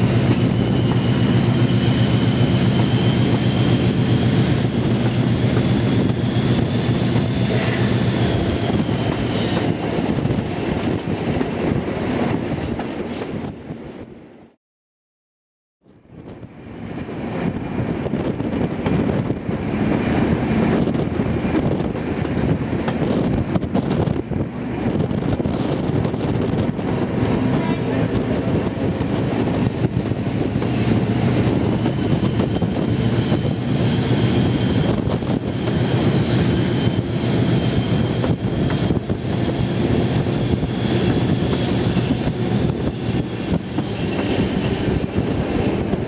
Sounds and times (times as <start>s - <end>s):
Wind noise (microphone): 0.0s - 14.2s, 15.8s - 46.0s.